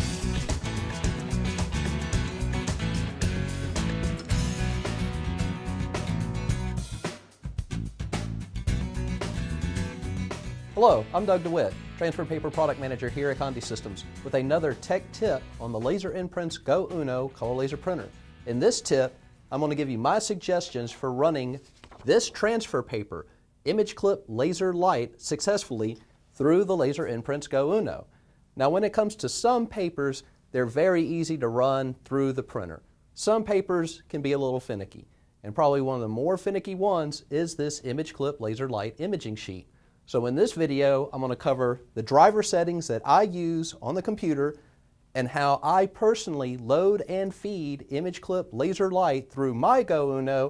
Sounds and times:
Speech: 10.8 - 44.6, 45.2 - 50.4.

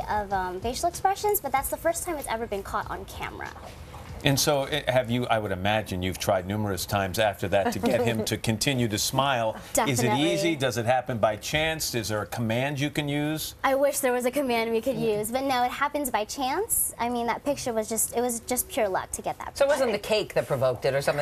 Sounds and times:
Speech: 9.9 - 10.7.

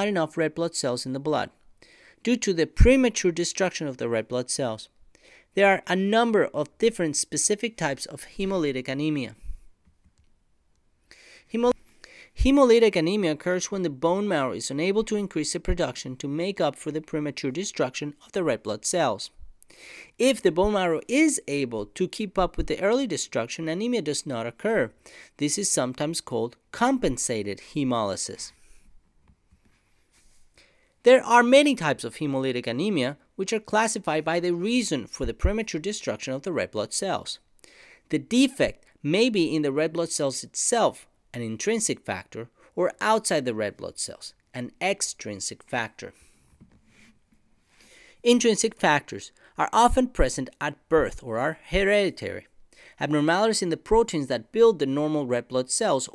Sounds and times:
Speech: 0.0 - 1.6, 2.2 - 4.9, 5.6 - 9.4, 11.5 - 11.8, 12.4 - 19.4, 20.2 - 28.6, 31.0 - 37.4, 38.1 - 46.2, 48.2 - 56.1.

